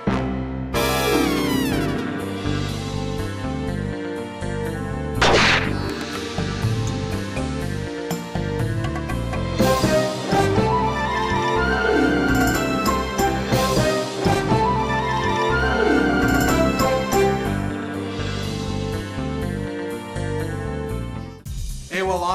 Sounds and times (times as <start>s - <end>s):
Music: 0.0s - 22.3s.